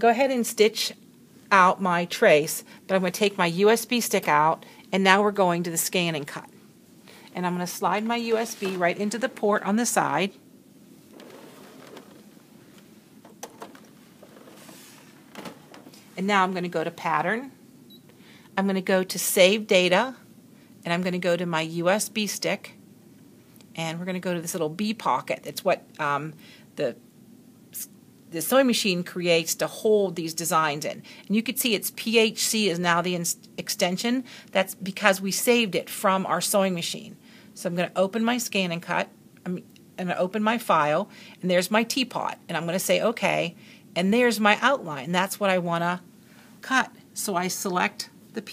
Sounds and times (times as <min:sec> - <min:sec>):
Speech: 0:00.0 - 0:06.5, 0:07.4 - 0:10.4, 0:16.2 - 0:17.6, 0:18.6 - 0:20.2, 0:20.8 - 0:22.8, 0:23.8 - 0:27.0, 0:27.8 - 0:46.0, 0:46.6 - 0:48.5.